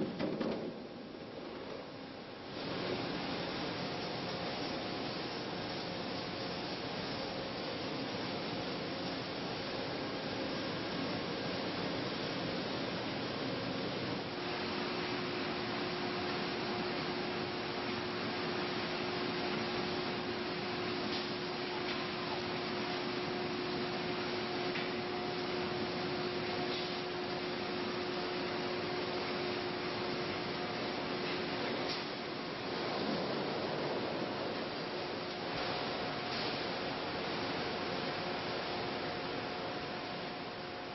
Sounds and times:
Pink noise: 0.0 - 40.9.

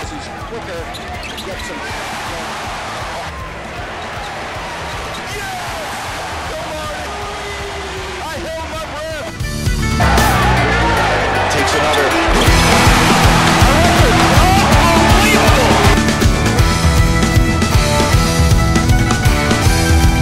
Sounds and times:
Music: 0.0 - 20.2
Speech: 6.5 - 9.3, 14.3 - 16.0.

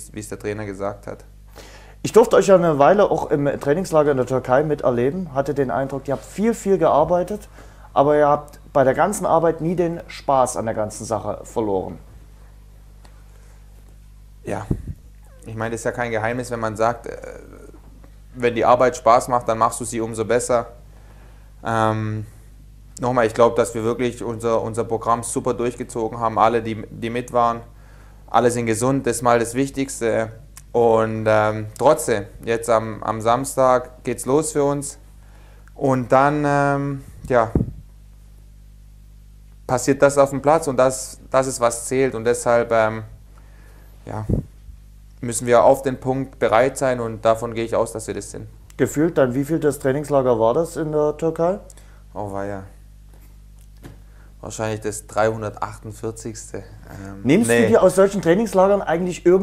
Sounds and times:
Speech: 0.0 - 1.3, 2.0 - 12.1, 14.4 - 20.8, 21.6 - 22.3, 23.0 - 27.7, 28.3 - 35.0, 35.8 - 37.7, 39.7 - 43.2, 44.0 - 44.5, 45.2 - 52.8, 54.4 - 59.4.

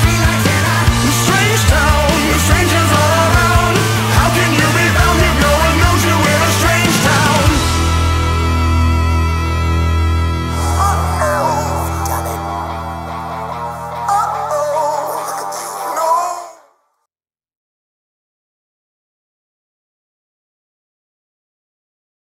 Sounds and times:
Music: 0.0 - 17.1
Speech: 10.5 - 12.6, 14.1 - 16.7.

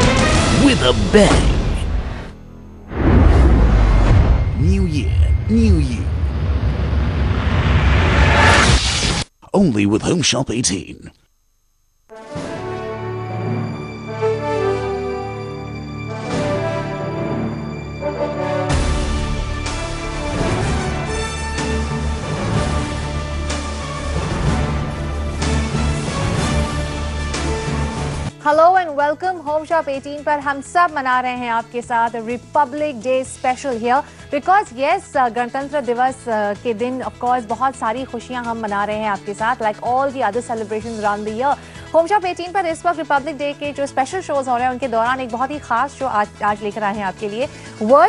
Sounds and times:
Speech: 4.6 - 6.1, 9.4 - 11.2.

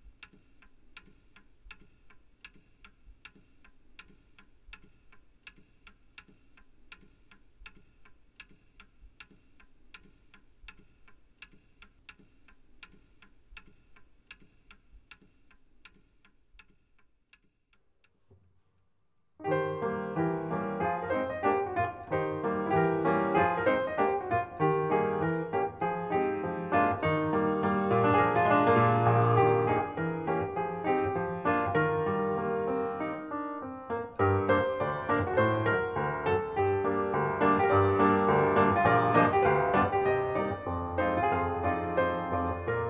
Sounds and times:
Music: 19.4 - 42.9.

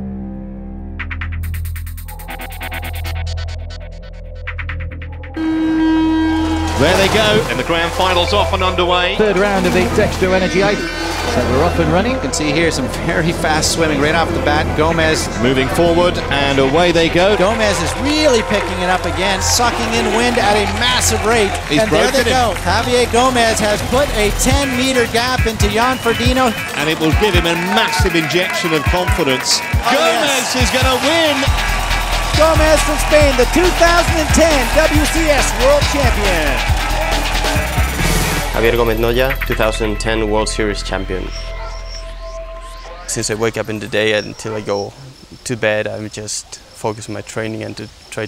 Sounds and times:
Music: 0.0 - 44.2
Speech: 6.8 - 31.5, 32.4 - 36.6, 38.6 - 41.3, 43.1 - 48.2.

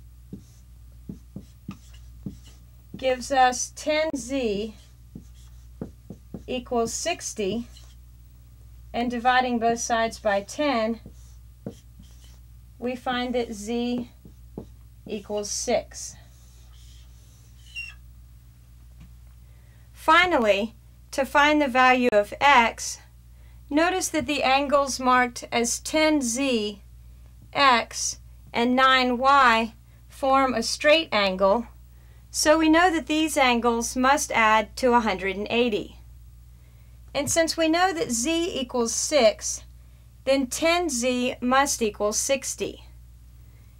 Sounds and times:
Speech: 3.0 - 4.8, 6.5 - 7.7, 8.9 - 11.1, 12.8 - 14.2, 15.1 - 16.2, 20.0 - 23.1, 23.7 - 26.8, 27.5 - 31.7, 32.4 - 36.0, 37.2 - 39.7, 40.3 - 42.9.

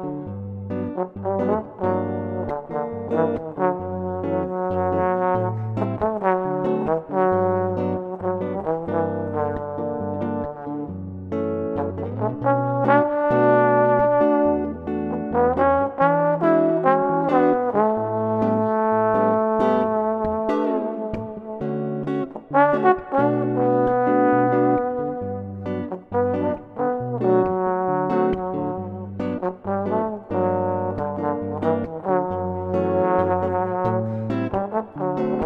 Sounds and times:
Acoustic guitar: 0.0 - 35.4
Electric guitar: 0.0 - 35.4
Strum: 0.0 - 35.4.

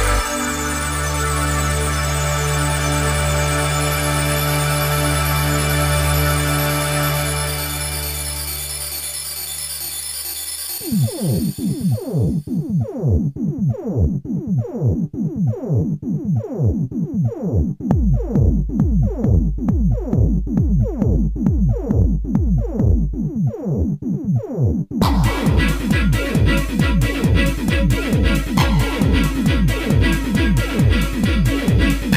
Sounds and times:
Music: 0.0 - 32.1.

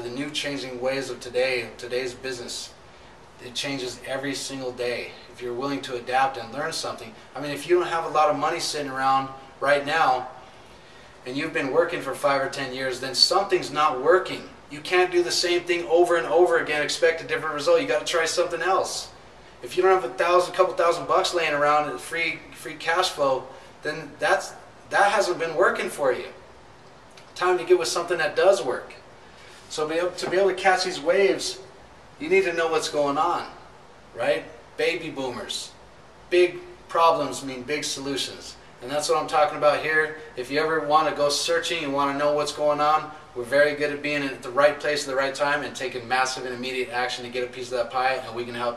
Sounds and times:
Speech: 0.0 - 2.8, 3.4 - 10.4, 11.2 - 26.4, 27.4 - 29.0, 29.7 - 33.6, 34.2 - 48.7.

